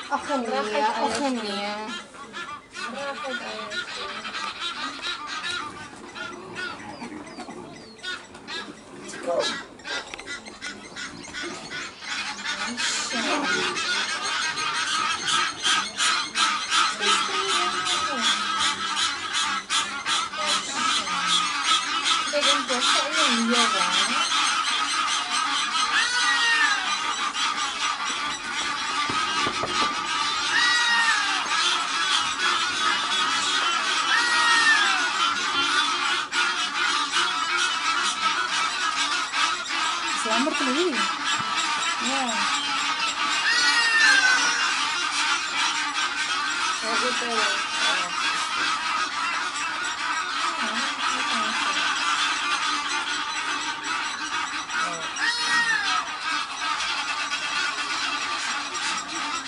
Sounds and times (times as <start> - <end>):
Honk: 0.0 - 59.4.